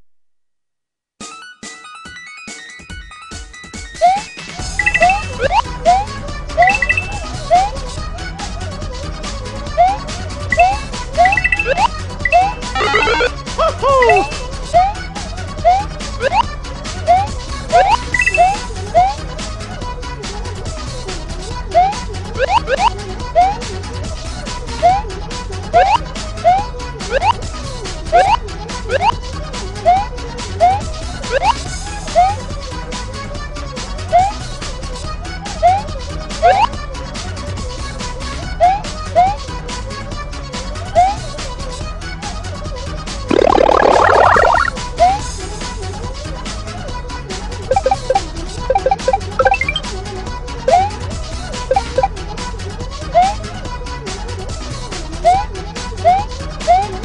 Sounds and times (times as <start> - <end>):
Music: 1.2 - 57.0.